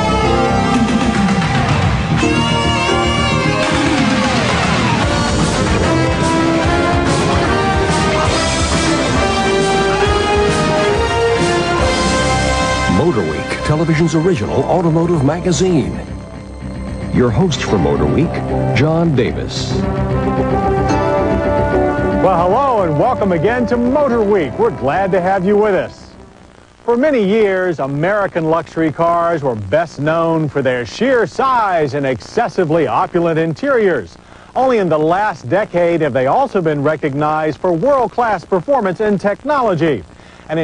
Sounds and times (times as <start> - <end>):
Music: 0.0 - 26.6
Speech: 12.9 - 16.1, 17.1 - 19.8, 22.2 - 26.2, 26.9 - 40.6.